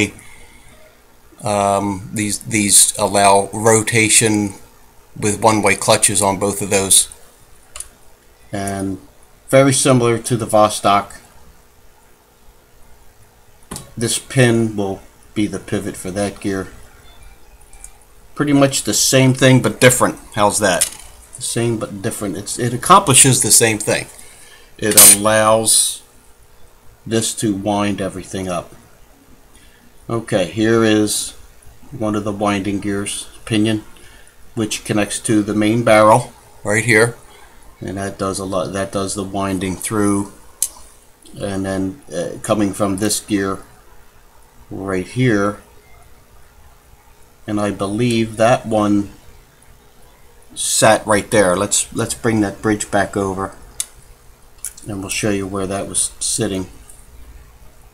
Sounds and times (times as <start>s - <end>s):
Speech: 0.0s - 0.2s, 1.4s - 7.2s, 8.5s - 11.3s, 14.0s - 16.8s, 18.4s - 24.2s, 24.8s - 26.1s, 27.1s - 28.8s, 30.1s - 33.9s, 34.6s - 37.2s, 37.8s - 40.4s, 41.3s - 43.8s, 44.7s - 45.7s, 47.5s - 49.2s, 50.6s - 53.6s, 54.7s - 56.8s.